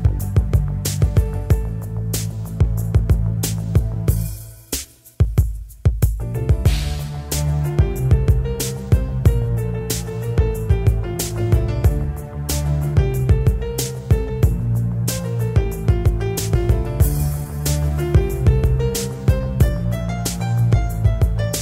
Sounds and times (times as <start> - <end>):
Soul music: 0.0 - 5.2, 6.2 - 21.6.